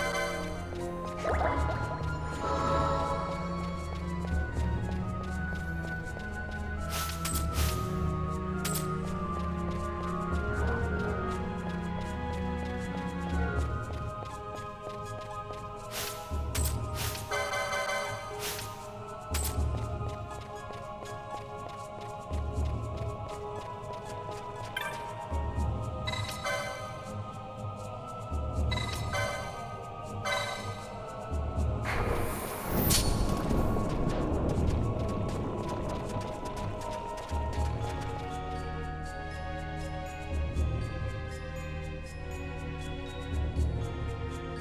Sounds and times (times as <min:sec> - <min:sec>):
Music: 0:00.0 - 0:44.6.